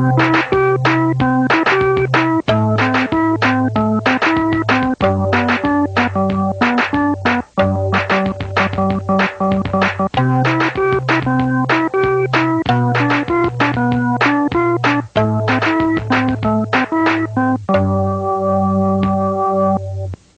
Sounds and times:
Harpsichord: 0.0s - 20.0s.

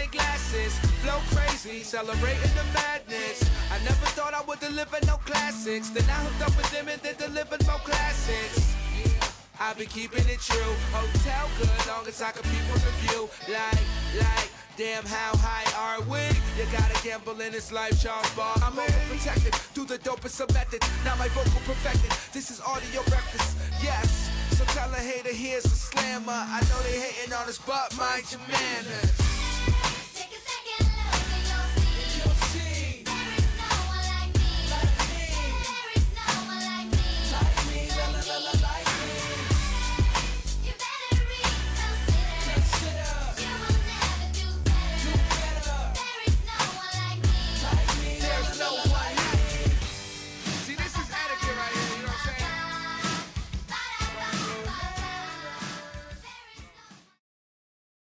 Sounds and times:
Music: 0.0s - 57.2s.

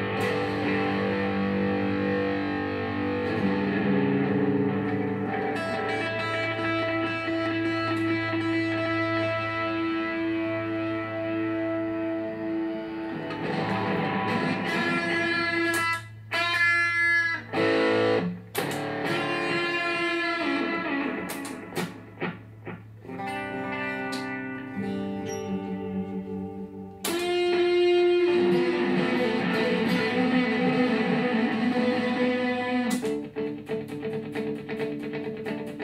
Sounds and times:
Electric guitar: 0.0s - 35.8s
Strum: 0.0s - 35.8s.

